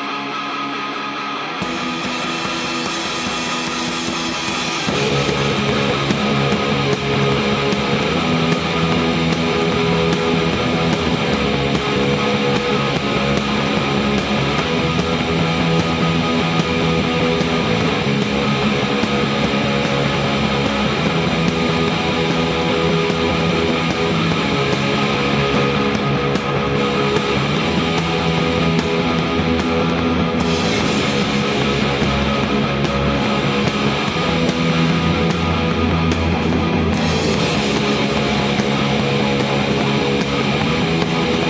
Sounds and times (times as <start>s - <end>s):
Music: 0.0s - 41.4s.